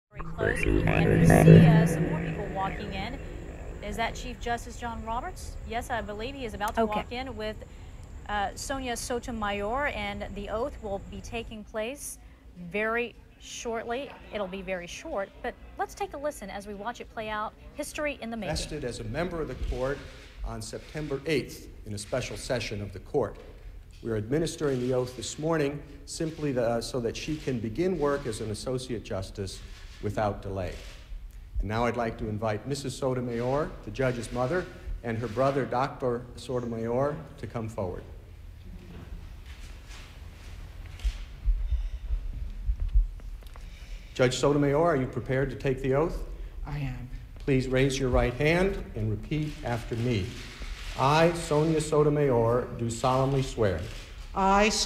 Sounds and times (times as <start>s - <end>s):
Speech: 0.0s - 7.6s, 44.2s - 50.4s
Inside, public space: 0.1s - 54.8s.